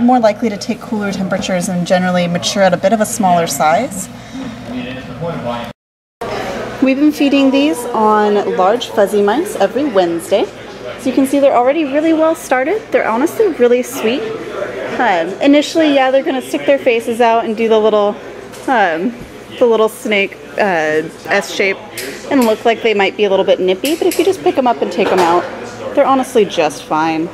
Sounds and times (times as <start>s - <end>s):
Inside, large room or hall: 0.0s - 27.3s
Speech: 0.0s - 27.3s.